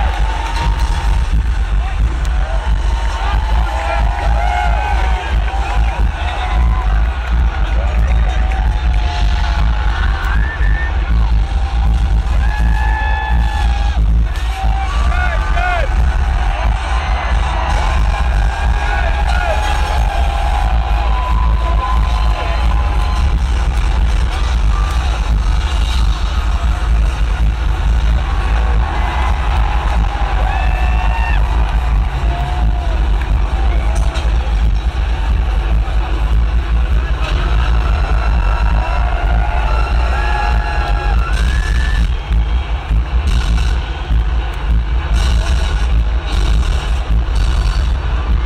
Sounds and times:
Music: 0.0 - 48.4.

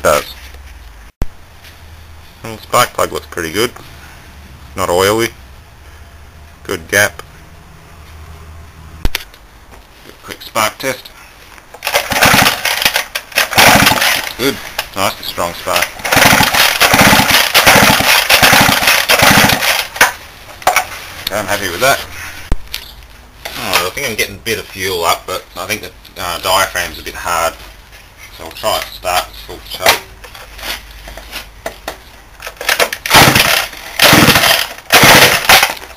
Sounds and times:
Speech: 0.0 - 0.4, 2.4 - 3.8, 4.8 - 5.4, 6.6 - 7.3, 10.1 - 11.2, 14.4 - 15.9, 21.3 - 22.1, 23.5 - 27.6, 28.3 - 30.1.

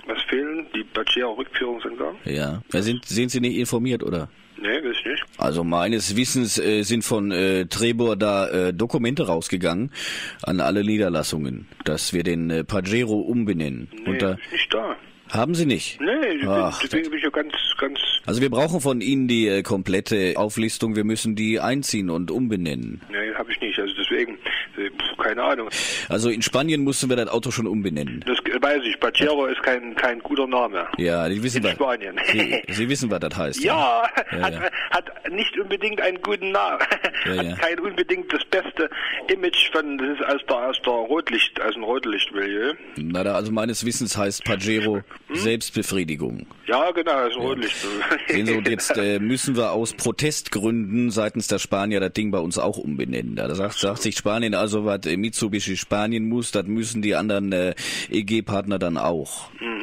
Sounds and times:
Speech: 0.0 - 34.6, 35.3 - 59.8.

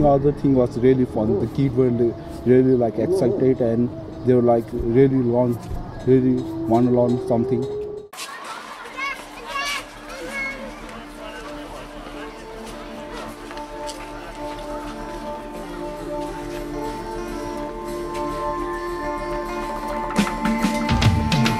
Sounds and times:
Speech: 0.0 - 13.4
Outside, urban or manmade: 0.0 - 21.5
Music: 9.2 - 21.5.

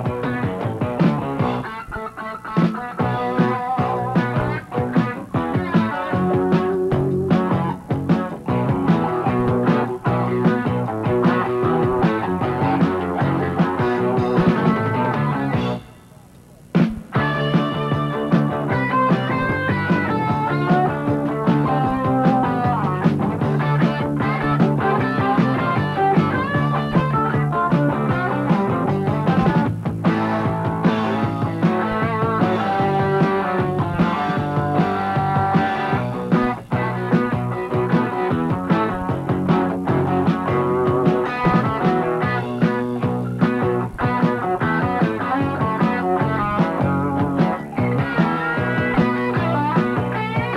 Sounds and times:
Music: 0.0 - 50.5.

